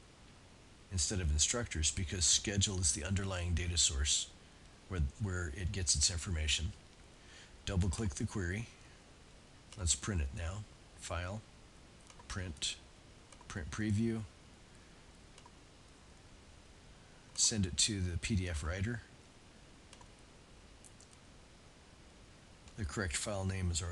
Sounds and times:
Inside, small room: 0.0 - 23.9
Speech: 0.9 - 6.8, 7.6 - 8.8, 9.8 - 11.5, 12.3 - 12.9, 13.5 - 14.4, 17.4 - 19.1, 22.8 - 23.9
Clicking: 12.0 - 12.3, 15.4 - 15.6, 19.9 - 20.1.

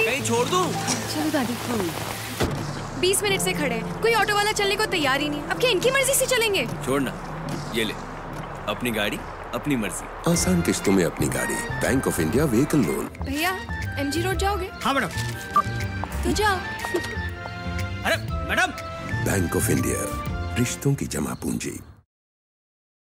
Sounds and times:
Music: 0.0 - 22.0.

